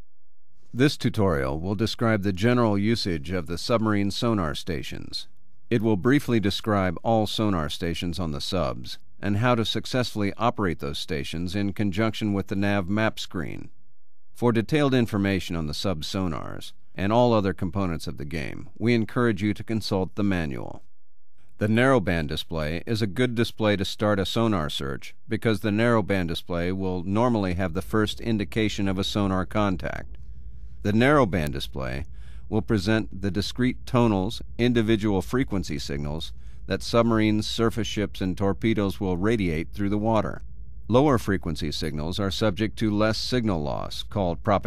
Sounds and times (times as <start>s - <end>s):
Speech: 0.8s - 13.8s, 14.4s - 20.8s, 21.6s - 30.1s, 30.8s - 44.6s.